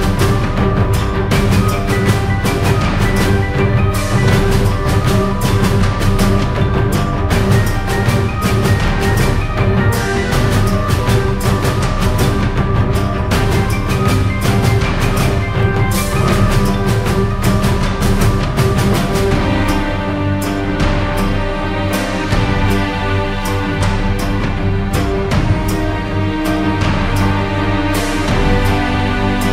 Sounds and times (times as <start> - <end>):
Music: 0.0 - 29.5.